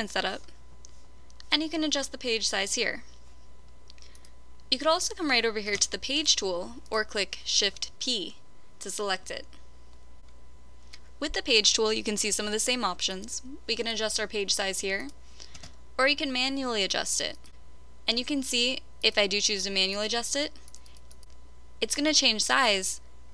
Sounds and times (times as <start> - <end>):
Speech: 0.0 - 0.5, 1.4 - 3.1, 4.7 - 9.6, 11.2 - 15.2, 16.0 - 17.4, 18.1 - 20.6, 21.8 - 23.0.